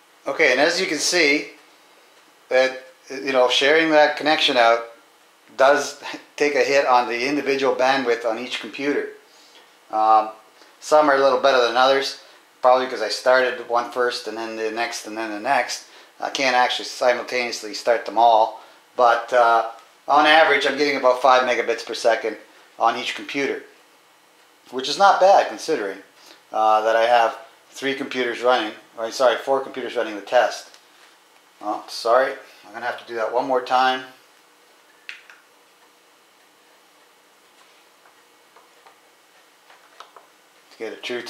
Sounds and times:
Inside, small room: 0.0 - 41.3
Speech: 0.2 - 1.6, 2.5 - 9.2, 9.9 - 23.7, 24.7 - 30.8, 31.6 - 34.2, 40.7 - 41.3.

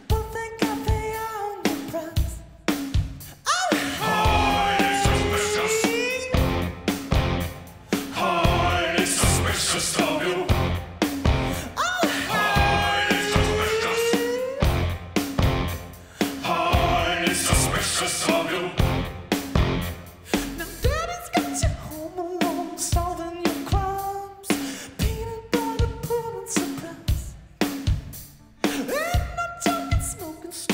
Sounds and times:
Music: 0.0 - 30.7.

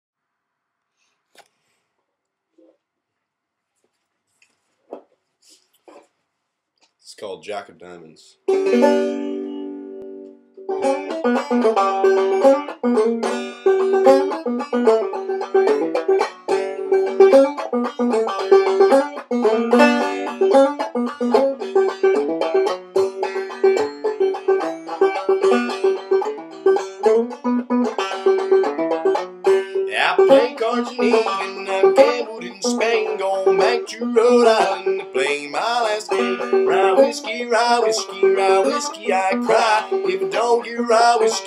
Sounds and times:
Speech: 7.0 - 8.4
Banjo: 8.4 - 41.4.

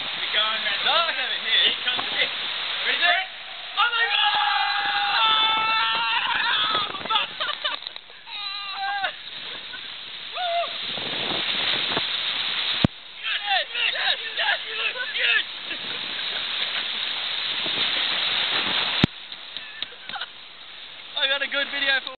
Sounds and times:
Stream: 0.0 - 22.1
Speech: 21.2 - 22.1.

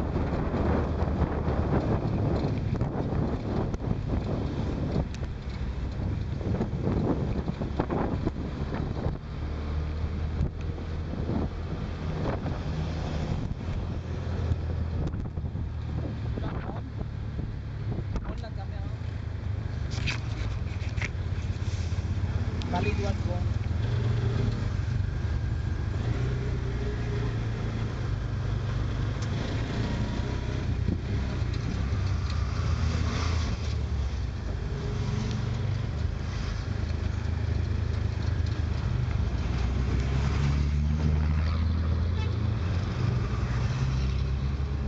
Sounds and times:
Vehicle: 0.0 - 44.8.

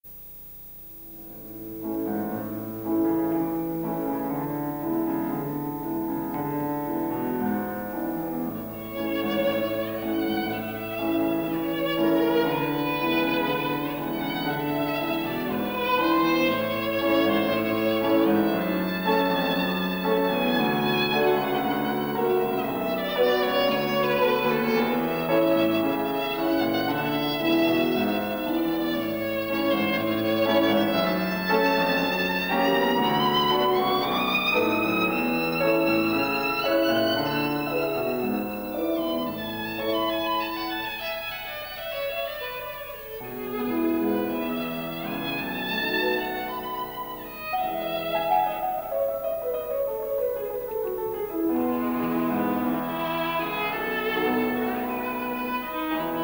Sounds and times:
Violin, fiddle: 1.4 - 56.2.

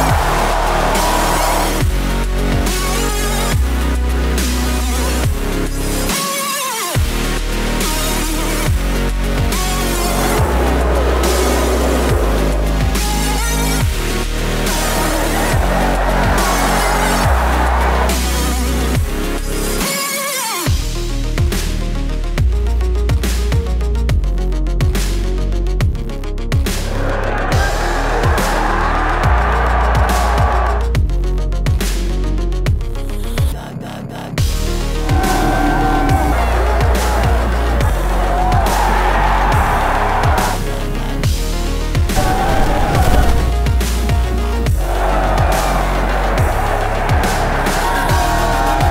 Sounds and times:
Crowd: 0.0 - 5.2, 6.1 - 20.7, 26.6 - 31.0, 34.7 - 48.9
Music: 0.0 - 48.9.

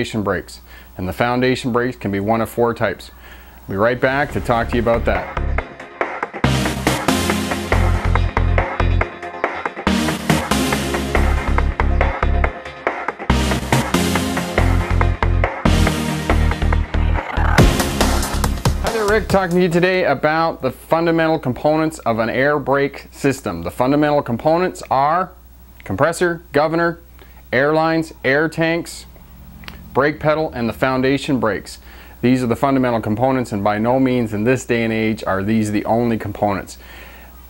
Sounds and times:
Speech: 0.0 - 5.4, 18.8 - 29.1, 30.0 - 36.8
Music: 4.1 - 19.8.

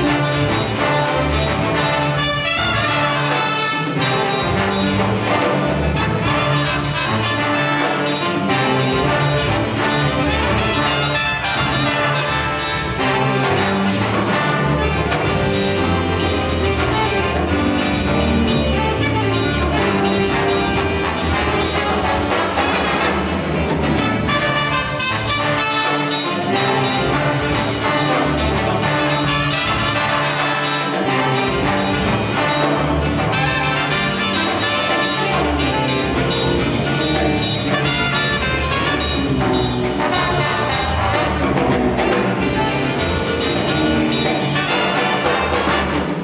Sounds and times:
Music: 0.0 - 46.2.

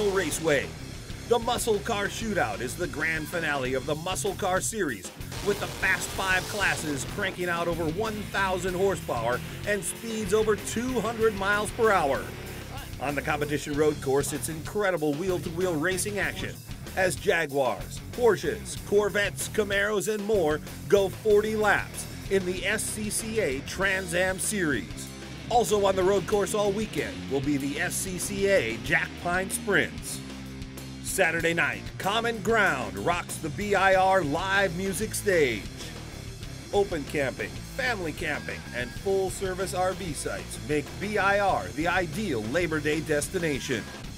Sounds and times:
Speech: 0.0 - 0.7, 1.3 - 30.2, 31.0 - 35.9, 36.7 - 44.0
Music: 0.0 - 44.1.

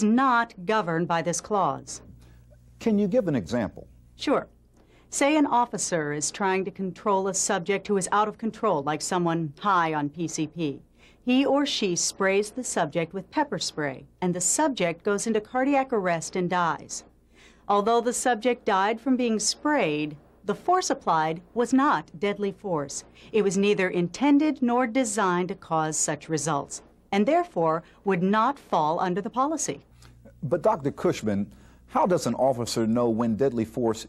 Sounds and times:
Conversation: 0.0 - 34.0.

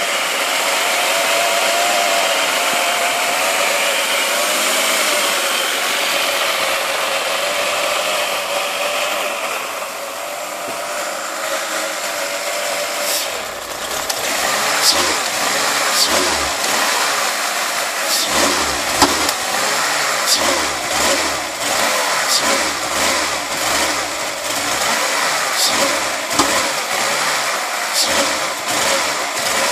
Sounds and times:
Engine: 0.0 - 29.7
Vehicle: 0.0 - 29.7.

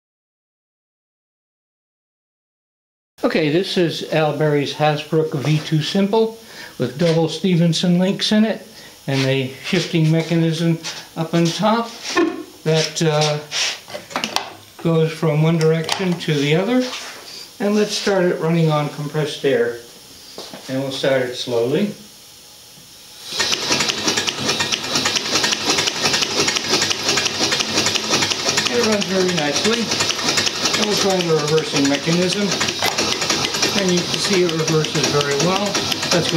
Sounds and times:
Speech: 3.2 - 13.6, 14.8 - 17.0, 17.6 - 19.9, 20.6 - 22.1, 28.7 - 29.9, 30.7 - 32.6, 33.7 - 36.3.

